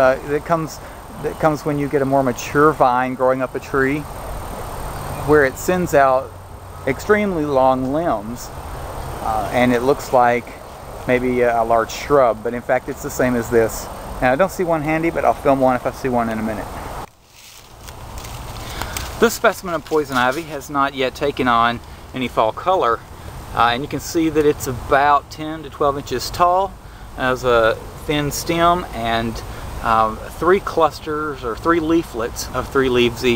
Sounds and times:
Speech: 0.0s - 4.1s, 5.2s - 8.6s, 9.2s - 16.8s, 19.2s - 23.0s, 23.6s - 33.3s.

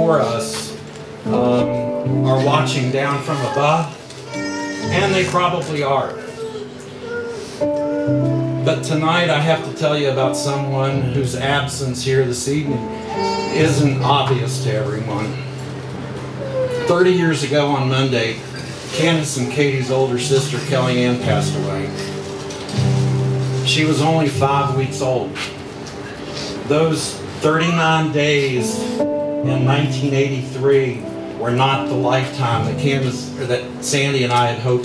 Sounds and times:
Male speech, man speaking: 0.0s - 4.0s, 4.9s - 6.4s, 8.6s - 15.5s, 16.8s - 22.1s, 23.7s - 25.5s, 26.7s - 34.8s
Narration, monologue: 0.0s - 6.3s, 8.5s - 34.8s
Music: 0.0s - 34.8s.

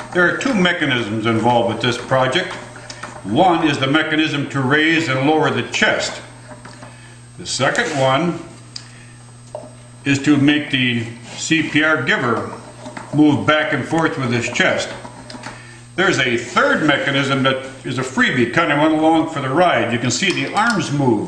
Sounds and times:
Speech: 0.2s - 2.6s, 3.2s - 6.3s, 7.4s - 8.5s, 10.0s - 15.0s, 16.0s - 21.2s.

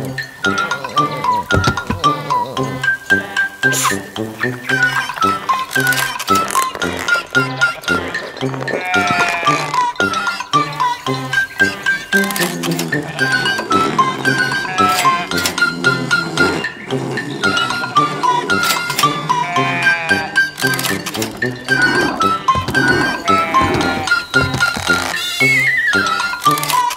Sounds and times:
Music: 0.0s - 26.9s
Bleat: 8.8s - 10.3s, 13.0s - 13.6s, 14.2s - 15.4s, 19.2s - 20.4s, 23.0s - 24.5s.

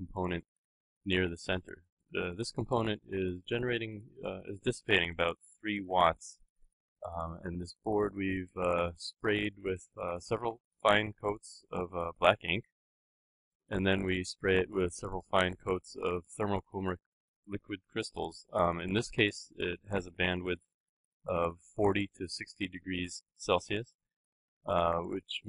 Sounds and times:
Speech: 0.0s - 0.4s, 1.1s - 6.4s, 7.0s - 12.7s, 13.7s - 20.6s, 21.3s - 23.9s, 24.7s - 25.4s.

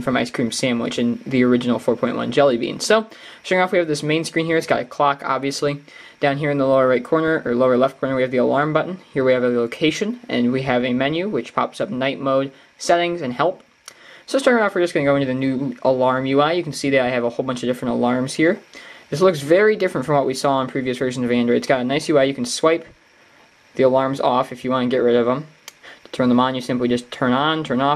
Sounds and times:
Speech: 0.0s - 13.7s, 14.3s - 23.0s, 23.8s - 27.9s.

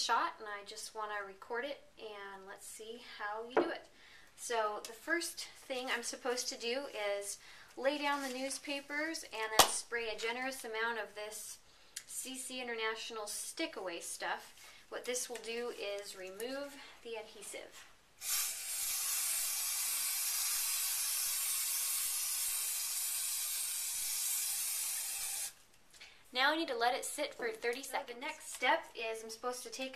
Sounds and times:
Speech: 0.0s - 17.8s, 26.4s - 29.9s.

